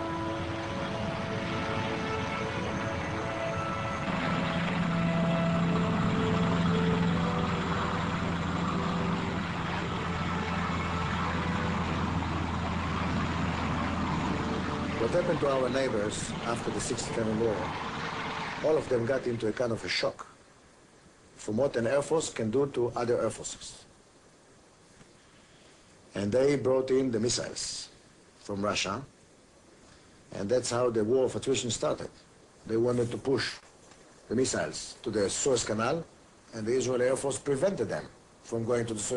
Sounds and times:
Aircraft: 0.0 - 19.5
Speech: 15.0 - 17.7, 18.6 - 20.4, 21.4 - 23.9, 26.1 - 29.1, 30.3 - 33.6, 34.3 - 39.1.

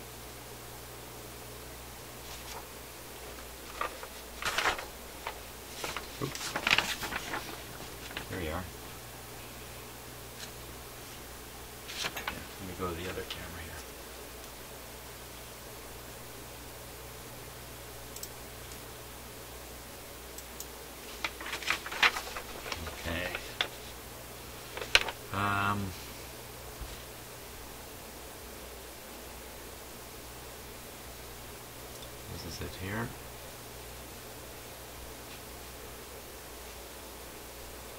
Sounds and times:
Inside, small room: 0.0 - 37.9
Speech: 8.2 - 8.7, 12.2 - 13.9, 22.8 - 23.6, 25.3 - 26.0, 32.3 - 33.2.

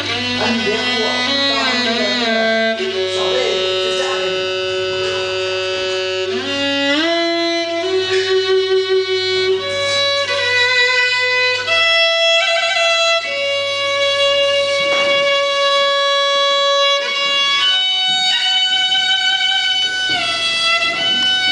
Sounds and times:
Music: 0.0 - 21.5
Speech: 0.2 - 5.4.

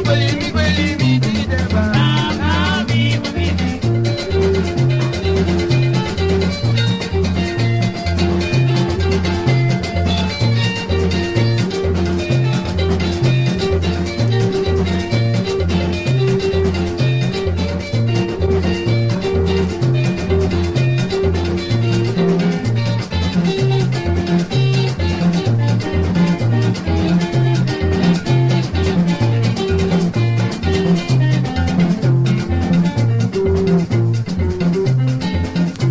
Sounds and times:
Salsa music: 0.0 - 35.9.

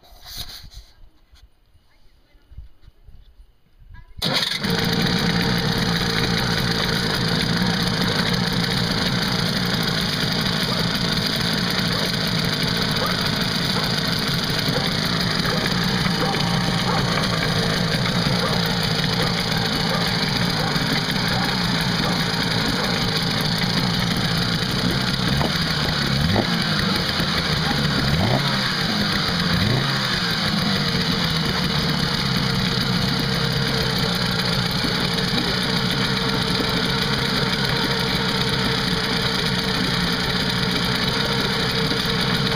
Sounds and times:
Motorboat, speedboat: 4.6 - 42.5.

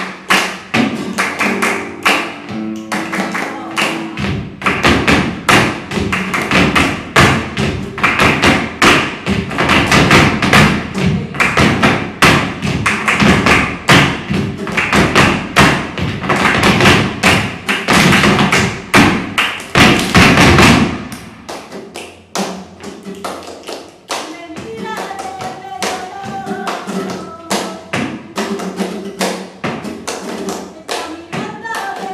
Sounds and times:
Thump, thud: 19.8 - 21.1.

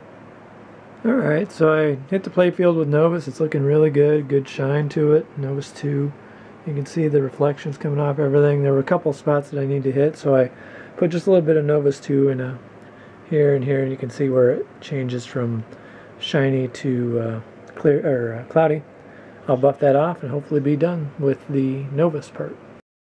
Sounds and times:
Speech: 1.0 - 22.8.

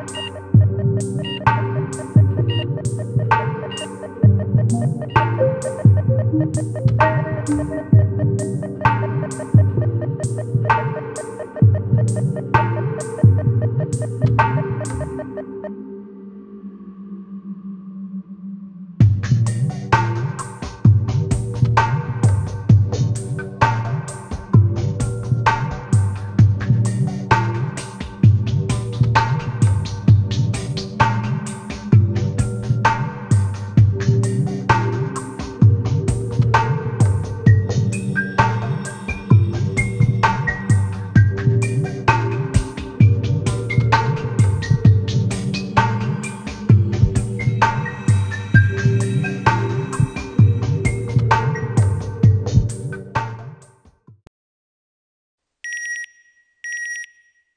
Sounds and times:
Throbbing: 0.0 - 15.7, 24.5 - 52.8.

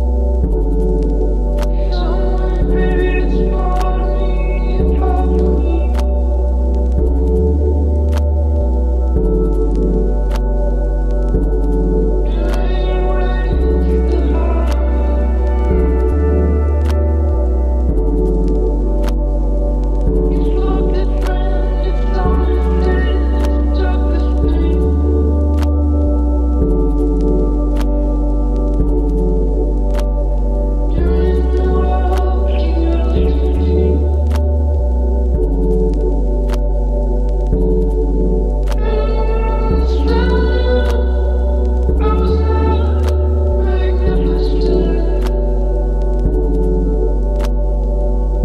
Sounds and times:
Music: 0.0 - 48.4.

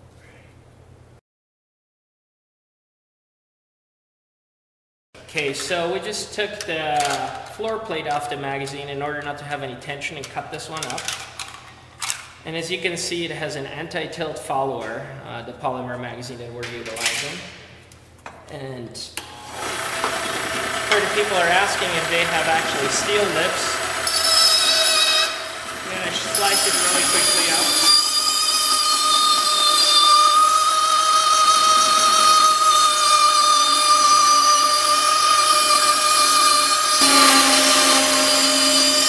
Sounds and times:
Speech: 5.3 - 11.1, 12.4 - 17.5, 18.5 - 19.2, 20.9 - 23.8, 25.9 - 27.8.

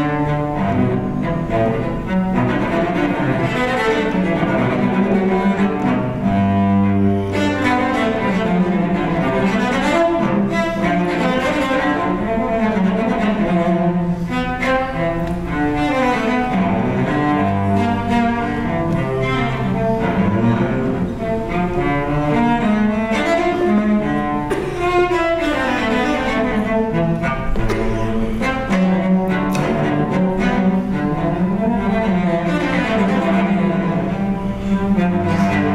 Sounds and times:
Cello: 0.0 - 35.7
Double bass: 0.0 - 35.7.

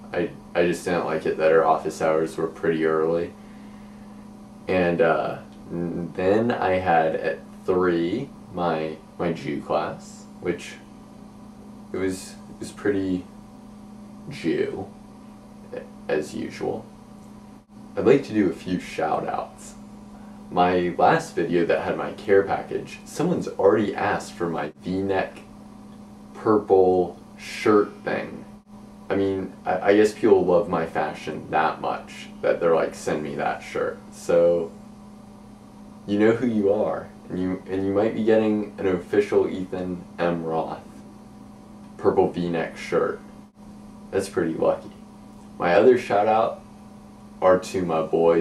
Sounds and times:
Speech: 0.1 - 3.4, 4.7 - 10.9, 11.9 - 13.3, 14.2 - 14.9, 15.7 - 16.9, 18.0 - 19.8, 20.5 - 25.5, 26.4 - 28.5, 29.1 - 34.7, 36.0 - 41.0, 42.0 - 43.3, 44.1 - 45.0, 45.6 - 46.6, 47.4 - 48.4.

